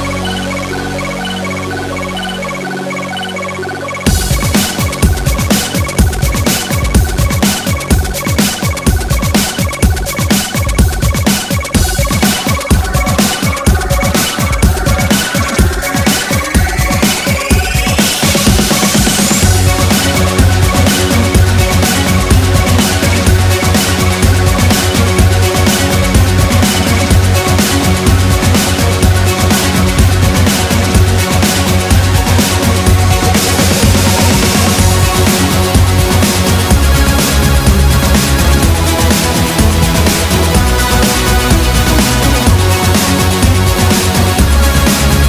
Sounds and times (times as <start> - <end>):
Drum and bass: 0.0 - 45.2.